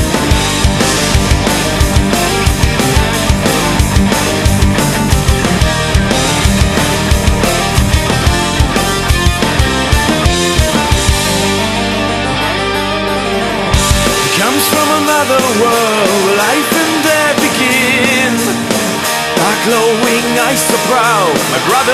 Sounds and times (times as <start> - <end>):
Music: 0.0 - 21.9.